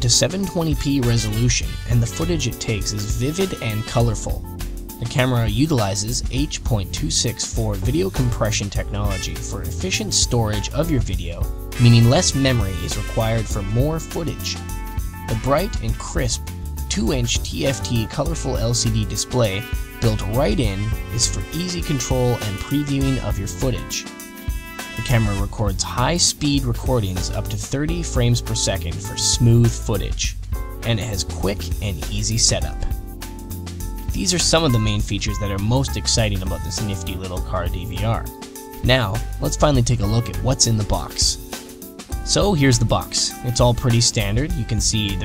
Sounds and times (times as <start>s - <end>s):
Speech: 0.0s - 14.6s, 15.3s - 24.1s, 25.0s - 32.9s, 34.2s - 41.4s, 42.3s - 45.2s
Music: 0.0s - 45.2s.